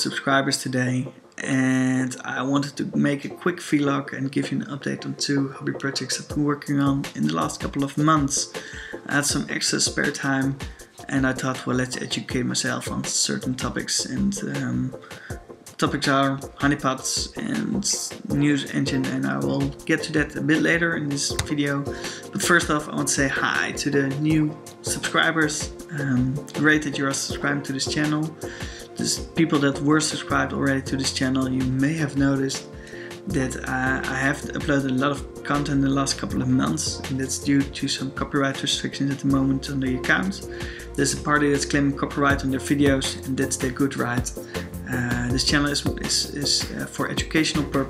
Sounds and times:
Music: 0.0 - 47.8
Speech: 0.0 - 47.8.

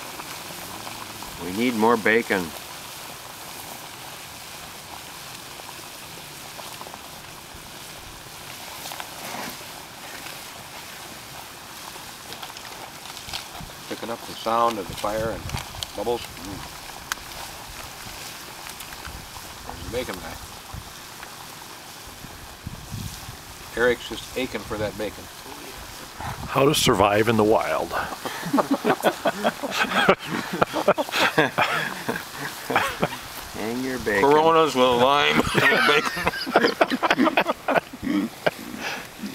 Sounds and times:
Boiling: 0.0 - 39.3
Speech: 0.7 - 2.6, 13.9 - 15.4, 16.0 - 16.7, 19.7 - 20.4, 23.7 - 25.8, 26.4 - 28.1, 33.6 - 36.1.

